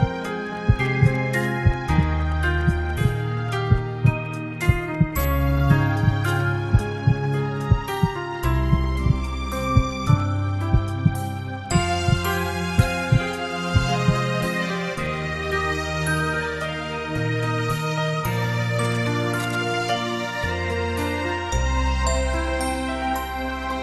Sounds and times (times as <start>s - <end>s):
Background music: 0.0s - 23.8s.